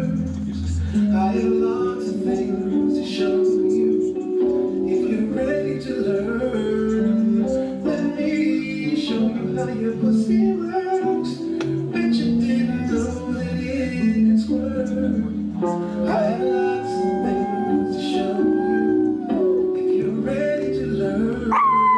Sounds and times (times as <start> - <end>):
Music: 0.0 - 21.9.